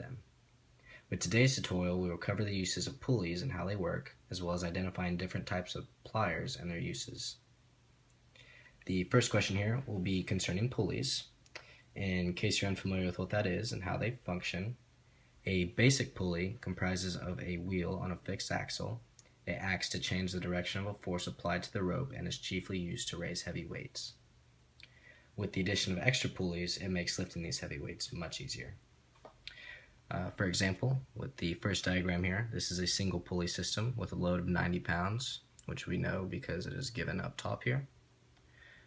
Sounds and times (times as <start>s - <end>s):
Speech: 0.0s - 0.3s, 1.1s - 7.4s, 8.8s - 11.4s, 12.0s - 14.8s, 15.4s - 24.2s, 25.4s - 28.8s, 30.1s - 38.0s.